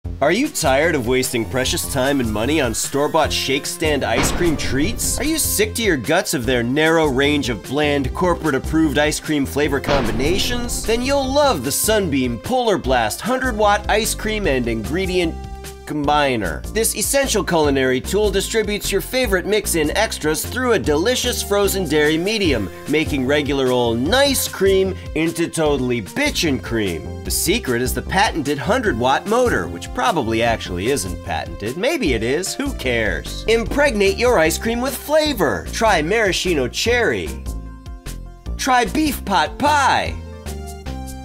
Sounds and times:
Music: 0:00.0 - 0:41.2
Speech: 0:00.2 - 0:37.4, 0:38.6 - 0:40.2.

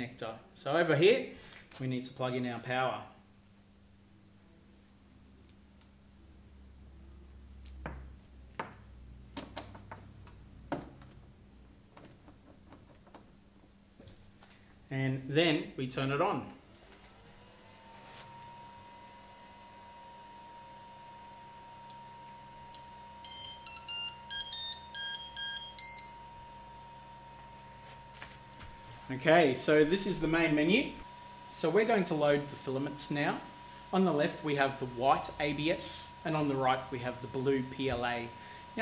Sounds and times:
Speech: 0:00.0 - 0:03.2, 0:14.9 - 0:16.6, 0:29.1 - 0:31.0, 0:31.6 - 0:38.8.

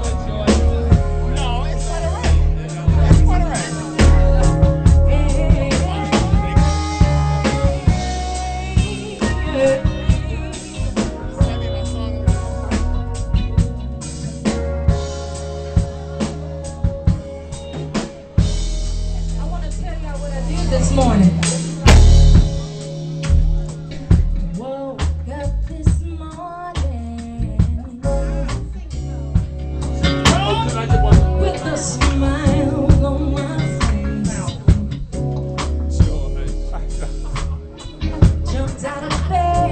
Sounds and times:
Music: 0:00.0 - 0:39.7
Female singing: 0:04.9 - 0:11.6, 0:24.5 - 0:28.5, 0:30.3 - 0:34.5, 0:38.4 - 0:39.7.

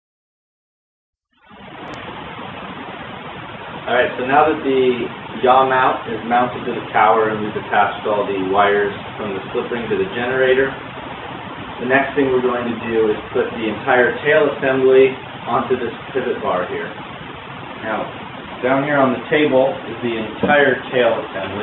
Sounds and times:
Speech: 0:03.9 - 0:10.8, 0:11.8 - 0:16.9, 0:17.8 - 0:21.6.

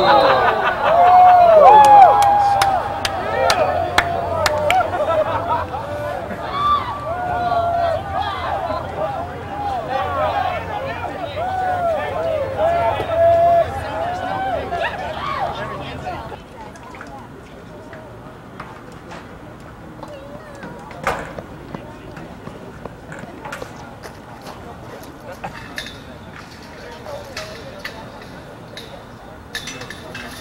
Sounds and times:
Speech: 0:07.3 - 0:30.4.

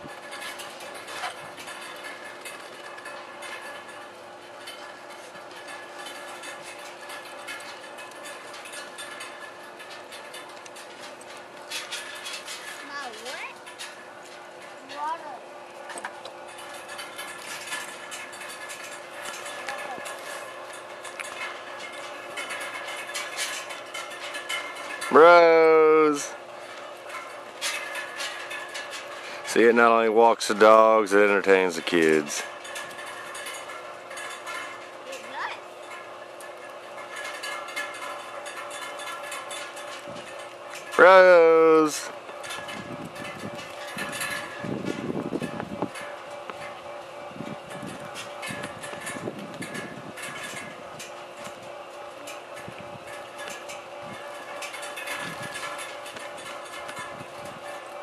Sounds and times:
Speech: 0:25.1 - 0:26.4, 0:29.5 - 0:32.4, 0:41.0 - 0:42.1.

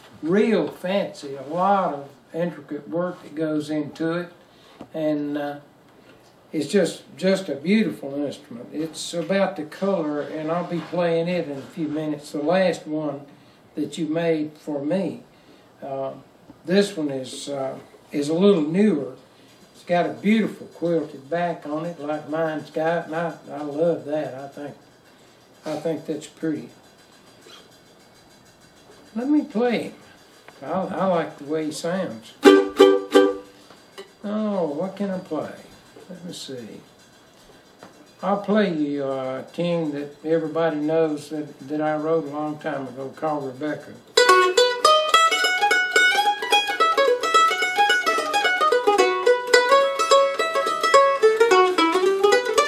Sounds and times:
Speech: 0:00.2 - 0:05.7, 0:06.5 - 0:19.2, 0:19.8 - 0:24.8, 0:25.6 - 0:26.8, 0:29.1 - 0:30.0, 0:30.6 - 0:32.4, 0:34.2 - 0:36.9, 0:38.2 - 0:44.1
Mandolin: 0:30.6 - 0:36.7, 0:38.2 - 0:52.6.

